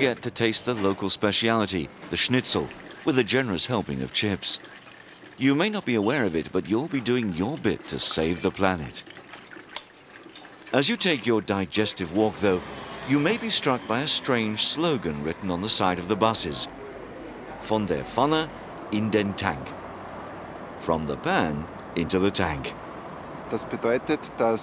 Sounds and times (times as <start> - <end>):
Speech: 0.0 - 4.6, 5.4 - 9.0, 10.7 - 16.7, 17.6 - 19.7, 20.8 - 22.8, 23.5 - 24.6.